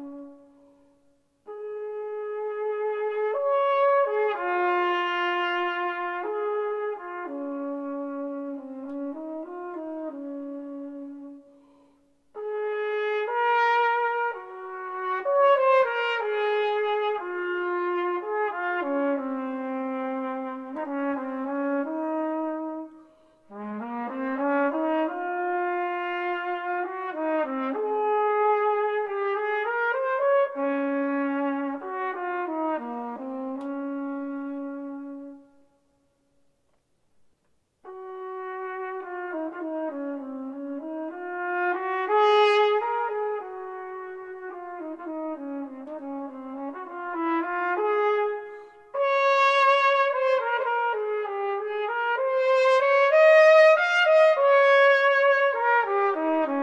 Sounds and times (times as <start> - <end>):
Trumpet: 0.0 - 56.6.